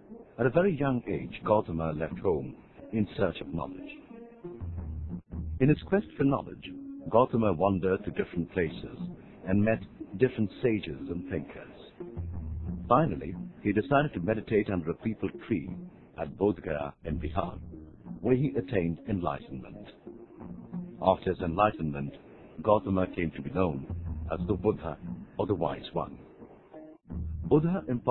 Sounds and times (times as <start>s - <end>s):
Music: 0.0s - 28.1s
Speech: 0.4s - 4.0s, 5.6s - 11.9s, 12.9s - 17.6s, 18.2s - 20.0s, 21.0s - 26.2s, 27.5s - 28.1s.